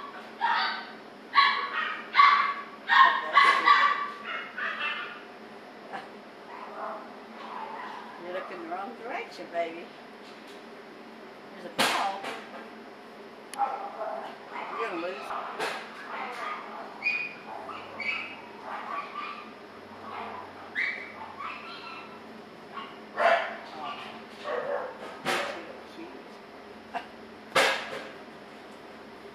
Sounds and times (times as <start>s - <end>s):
Dog: 0.4s - 5.2s, 13.6s - 22.2s, 22.8s - 25.6s
Speech: 3.1s - 3.8s, 8.2s - 9.9s, 14.8s - 15.3s.